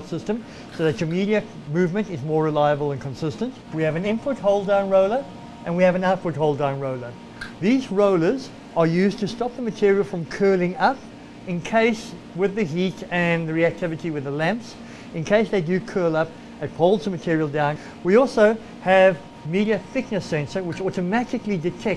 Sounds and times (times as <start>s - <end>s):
Speech: 0.0s - 21.9s.